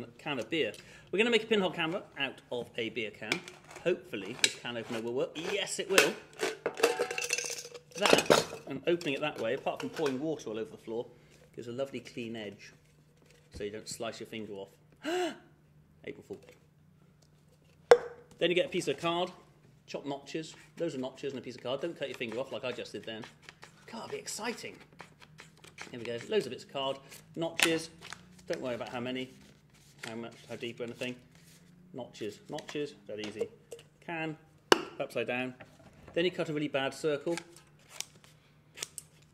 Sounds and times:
Speech: 0:00.0 - 0:06.2, 0:08.0 - 0:12.8, 0:13.5 - 0:14.8, 0:16.0 - 0:16.5, 0:18.4 - 0:23.3, 0:23.9 - 0:24.8, 0:25.9 - 0:29.4, 0:30.0 - 0:31.2, 0:32.0 - 0:34.4, 0:35.0 - 0:37.5.

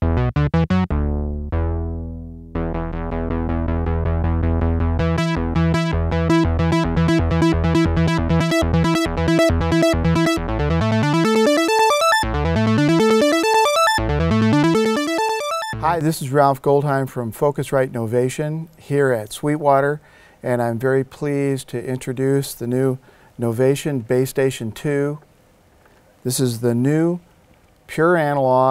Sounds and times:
Speech: 0:15.8 - 0:25.2, 0:26.2 - 0:27.2, 0:27.9 - 0:28.7.

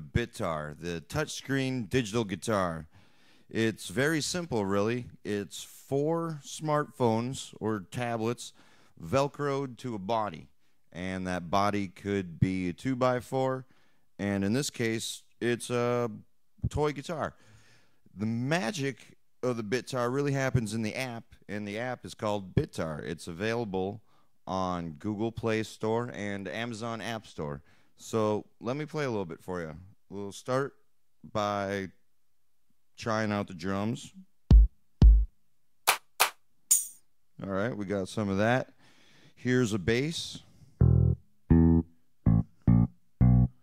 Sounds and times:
Speech: 0:00.0 - 0:02.9, 0:03.5 - 0:17.4, 0:18.2 - 0:32.0, 0:33.0 - 0:34.2, 0:37.4 - 0:38.8, 0:39.4 - 0:40.5.

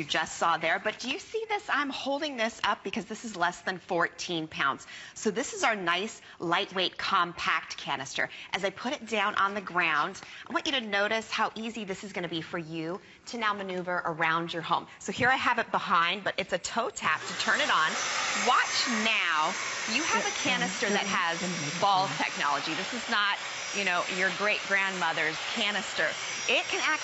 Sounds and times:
Speech: 0:00.0 - 0:27.0.

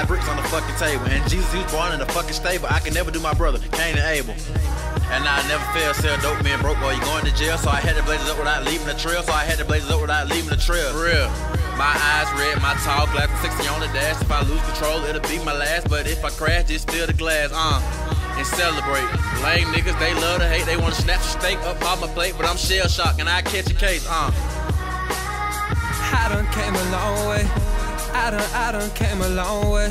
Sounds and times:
Funk: 0:00.0 - 0:29.9
Jazz: 0:00.0 - 0:29.9.

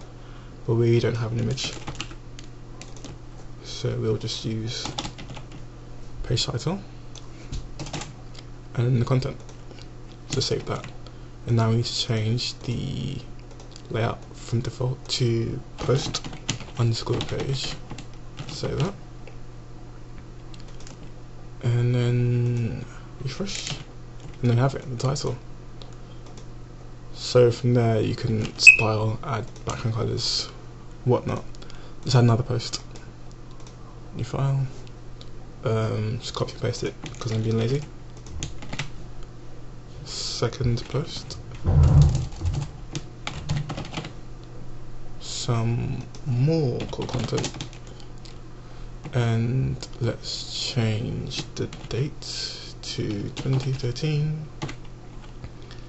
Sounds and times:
Computer keyboard: 0:01.6 - 0:03.2, 0:04.8 - 0:05.6, 0:07.8 - 0:08.1, 0:15.8 - 0:18.9, 0:20.5 - 0:21.1, 0:23.6 - 0:24.4, 0:37.0 - 0:38.9, 0:42.6 - 0:44.1, 0:46.8 - 0:47.8, 0:51.4 - 0:52.0, 0:53.4 - 0:53.8, 0:54.6 - 0:55.7.

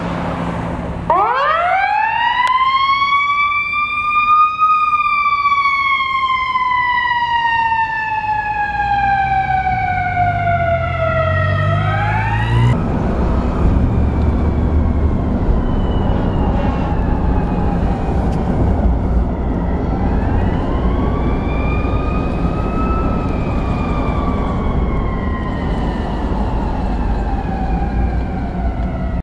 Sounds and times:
Police car (siren): 0:01.1 - 0:29.2.

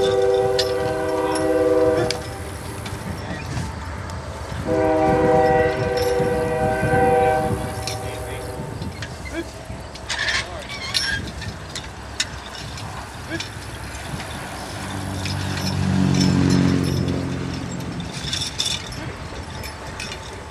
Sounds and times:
Train horn: 0:00.0 - 0:03.1, 0:04.6 - 0:08.8
Railroad car, train wagon: 0:00.0 - 0:20.5.

